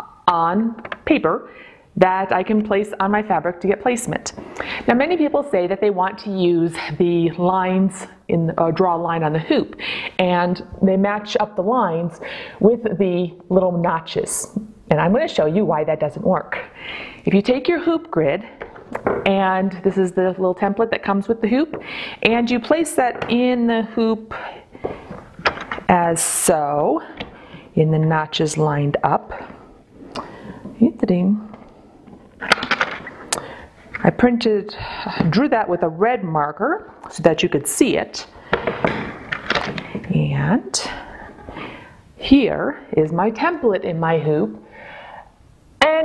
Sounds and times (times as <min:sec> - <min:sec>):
Speech: 0:02.0 - 0:16.7, 0:17.3 - 0:18.5, 0:19.3 - 0:24.4, 0:25.9 - 0:27.1, 0:27.8 - 0:29.3, 0:30.8 - 0:31.5, 0:34.0 - 0:38.3, 0:40.1 - 0:41.0, 0:42.2 - 0:44.6, 0:45.8 - 0:46.0.